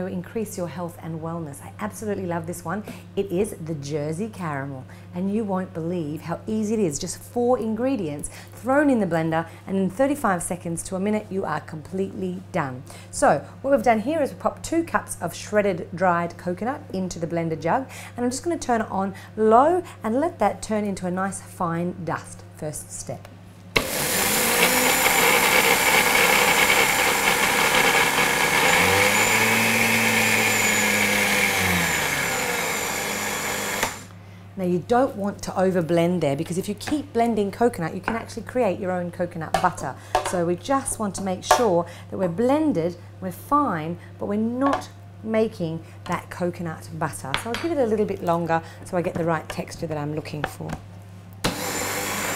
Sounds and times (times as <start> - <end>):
Speech: 0.0 - 23.3, 34.6 - 50.8
Blender: 23.8 - 34.2, 51.4 - 52.3.